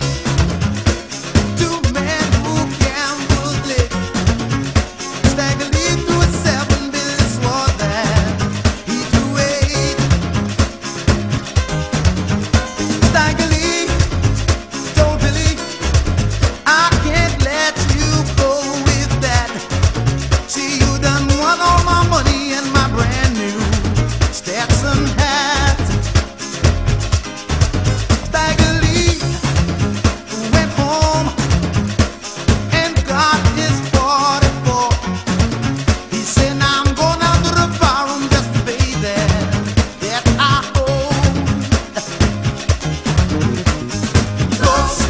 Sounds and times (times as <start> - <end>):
Music: 0.0 - 45.0.